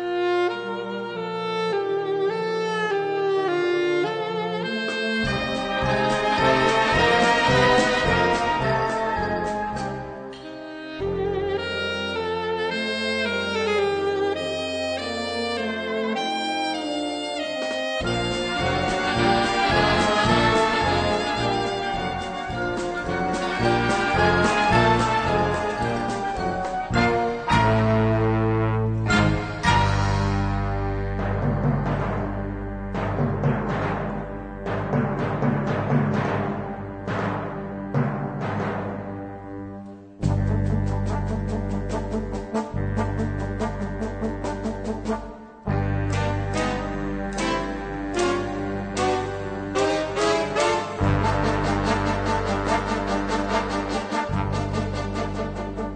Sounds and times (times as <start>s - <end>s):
Bowed string instrument: 0.0s - 55.9s.